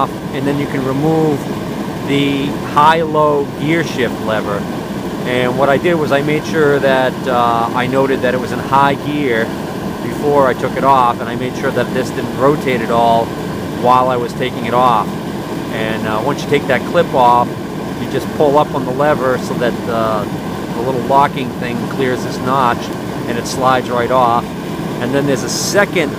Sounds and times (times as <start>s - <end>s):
Engine: 0.0s - 26.1s.